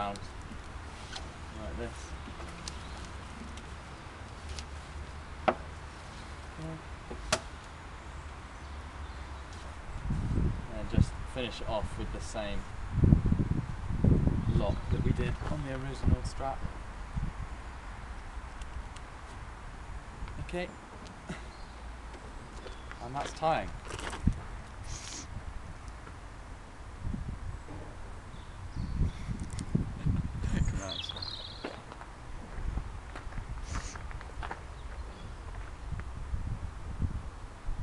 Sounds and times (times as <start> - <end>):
Outside, rural or natural: 0.0 - 37.8
Speech: 1.6 - 2.1, 10.7 - 12.7, 14.6 - 16.7, 20.4 - 20.8, 23.0 - 23.8, 30.6 - 31.1.